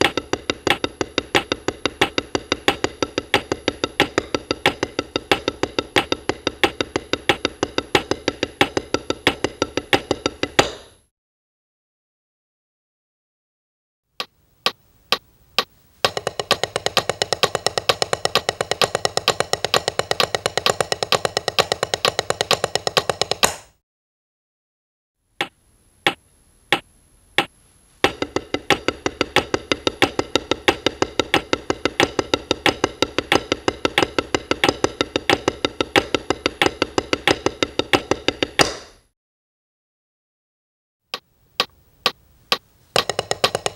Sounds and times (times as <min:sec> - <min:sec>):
Drum: 0:00.0 - 0:10.8, 0:15.6 - 0:23.6, 0:28.1 - 0:38.8, 0:43.0 - 0:43.7.